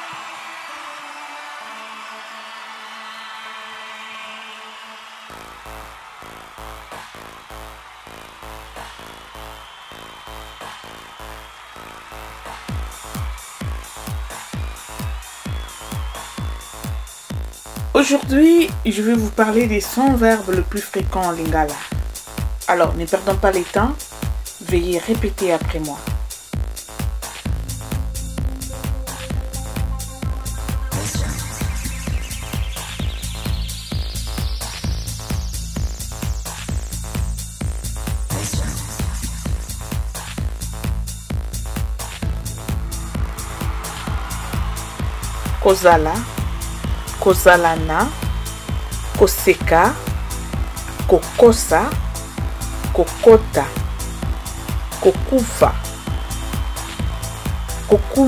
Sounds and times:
Music: 0.0 - 58.2
Speech: 18.0 - 21.9, 22.7 - 24.0, 24.6 - 26.0, 31.0 - 31.4, 38.3 - 38.9, 45.6 - 46.3, 47.2 - 48.2, 49.2 - 50.0, 51.0 - 52.0, 53.0 - 53.8, 55.0 - 55.8, 57.9 - 58.2.

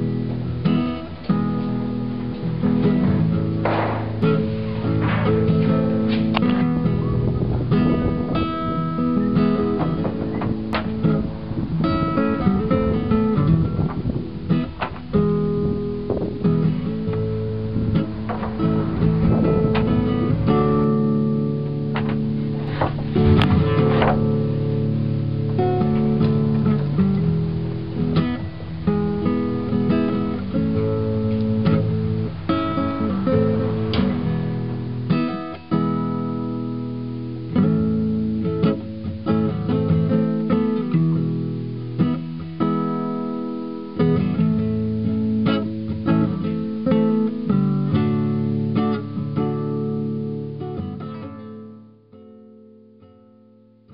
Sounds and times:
Strum: 0.0 - 53.1.

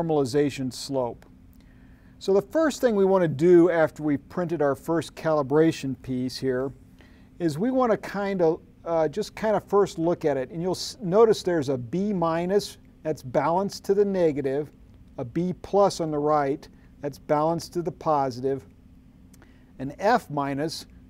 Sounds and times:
Speech: 0.0 - 1.3, 2.2 - 6.8, 7.4 - 18.7, 19.8 - 20.9.

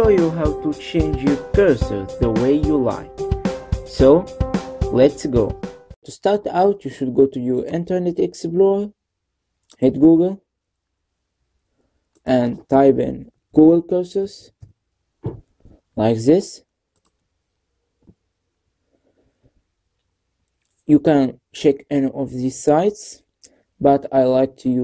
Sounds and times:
Speech: 0.0 - 3.1, 3.9 - 4.3, 4.9 - 9.0, 9.7 - 10.5, 12.3 - 14.6, 16.0 - 16.7, 20.9 - 24.8.

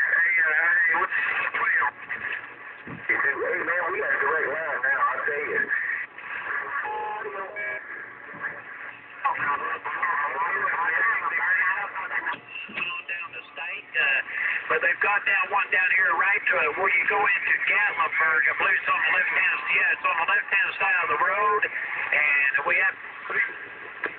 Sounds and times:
Radio: 0.0 - 24.1
Speech: 3.1 - 5.7, 9.2 - 23.6.

